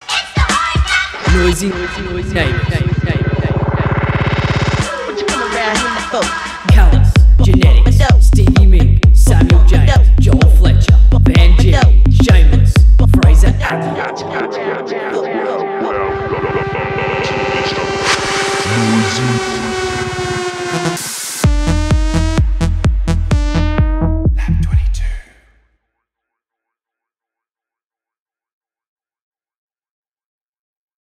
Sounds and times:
Music: 0.0 - 25.1
Speech: 1.3 - 3.9, 11.4 - 18.0, 18.6 - 19.7, 24.4 - 25.5.

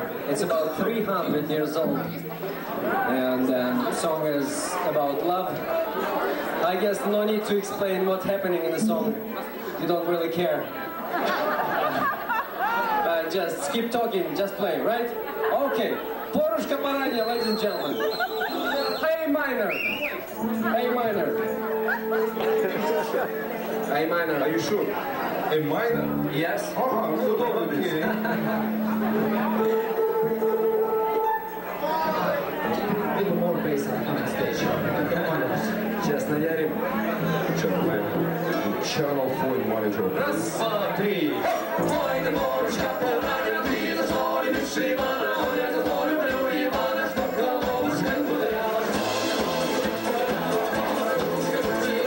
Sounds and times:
Music: 0.0 - 5.3, 8.7 - 9.5, 20.0 - 52.0
Speech: 12.8 - 18.0, 31.8 - 41.9.

